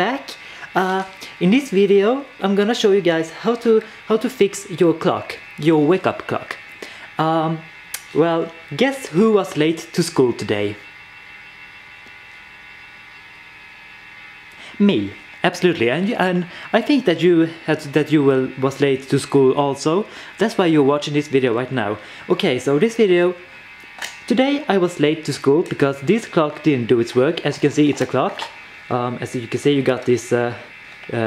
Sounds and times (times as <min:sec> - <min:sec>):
Speech: 0:00.0 - 0:06.6, 0:07.2 - 0:10.8, 0:14.7 - 0:23.5, 0:24.2 - 0:31.2.